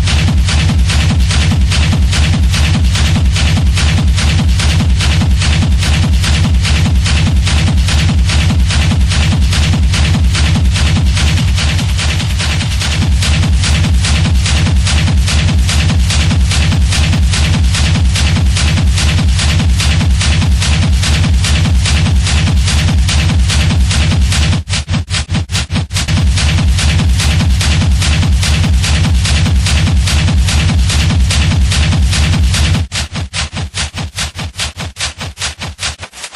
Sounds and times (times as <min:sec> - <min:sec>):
Techno: 0:00.0 - 0:36.3.